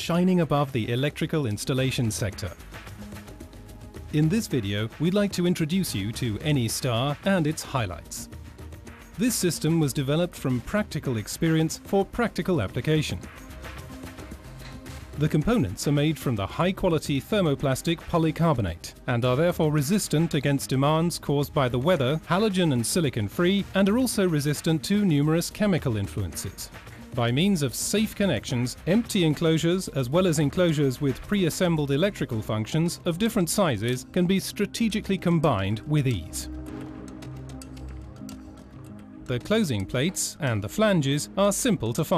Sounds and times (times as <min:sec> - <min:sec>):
Speech: 0:00.0 - 0:02.6, 0:04.2 - 0:08.3, 0:09.2 - 0:13.2, 0:15.2 - 0:36.5, 0:39.3 - 0:42.1
Music: 0:00.0 - 0:42.1.